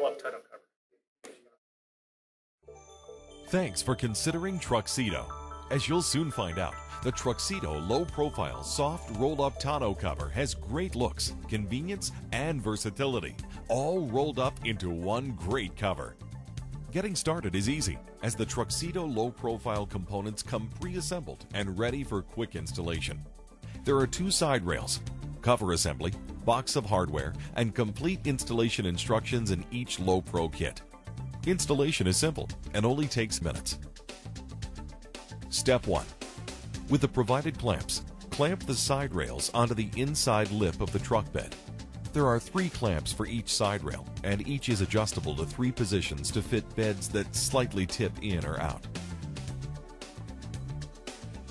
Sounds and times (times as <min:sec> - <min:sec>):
Speech: 0:00.0 - 0:00.6, 0:03.5 - 0:16.1, 0:16.9 - 0:23.2, 0:23.8 - 0:30.8, 0:31.4 - 0:33.8, 0:35.5 - 0:36.2, 0:36.9 - 0:48.9
Music: 0:02.6 - 0:51.5.